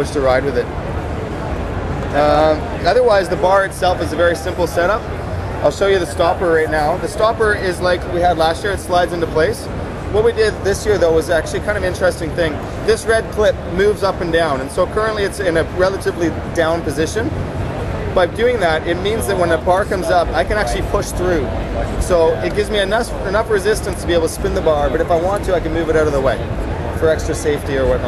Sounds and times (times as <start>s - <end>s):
Speech: 0.0s - 0.7s, 2.1s - 17.4s, 18.1s - 28.0s.